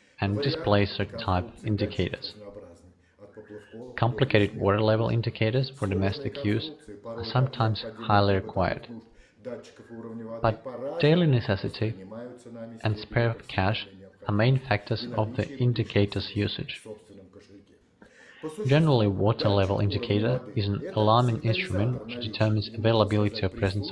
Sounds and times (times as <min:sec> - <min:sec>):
Speech: 0:00.2 - 0:23.9.